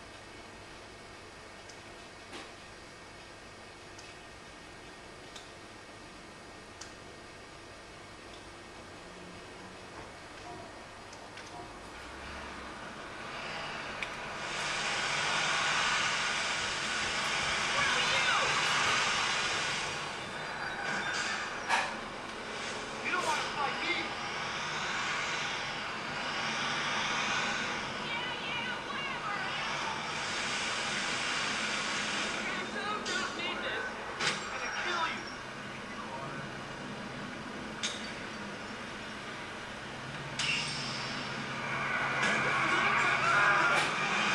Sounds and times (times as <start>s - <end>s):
Vehicle: 8.7s - 44.3s.